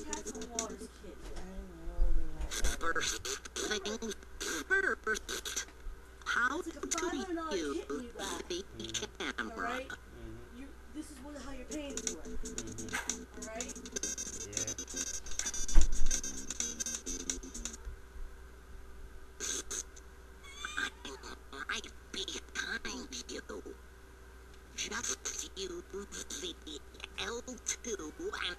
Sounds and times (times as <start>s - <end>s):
Speech: 0.0s - 5.3s, 6.3s - 13.8s, 14.4s - 15.0s, 20.8s - 23.8s, 24.8s - 28.5s.